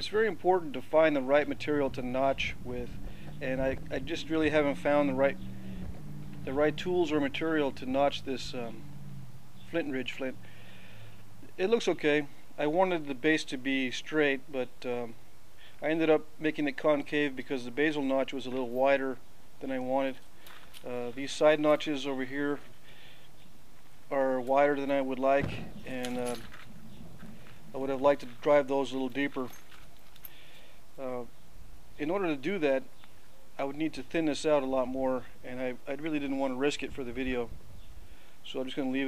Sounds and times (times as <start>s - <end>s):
Speech: 0.0s - 5.4s, 6.5s - 8.8s, 9.7s - 10.4s, 11.5s - 15.2s, 15.8s - 20.2s, 20.8s - 22.6s, 24.1s - 26.5s, 27.7s - 29.6s, 31.0s - 31.3s, 32.0s - 32.9s, 33.6s - 37.5s, 38.5s - 39.0s.